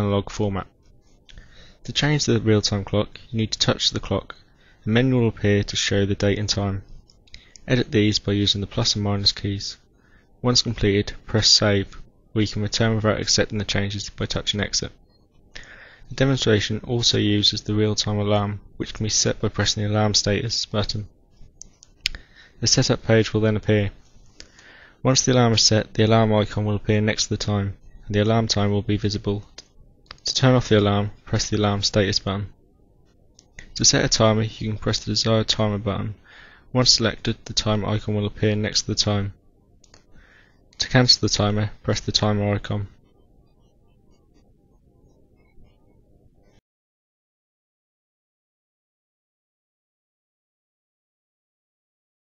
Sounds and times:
Speech: 0.0s - 0.7s, 1.9s - 6.9s, 7.6s - 15.0s, 16.1s - 21.1s, 22.6s - 24.0s, 25.0s - 32.6s, 33.6s - 39.4s, 40.8s - 43.0s.

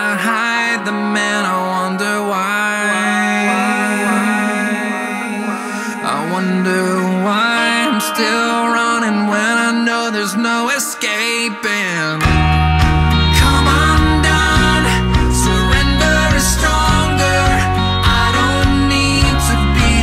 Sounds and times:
Theme music: 0.8s - 20.0s.

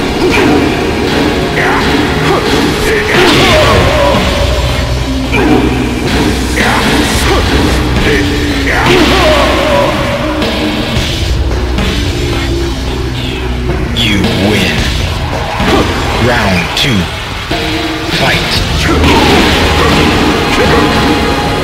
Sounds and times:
Music: 0.0s - 21.6s
Speech: 13.9s - 14.9s, 16.2s - 17.1s, 18.2s - 21.0s.

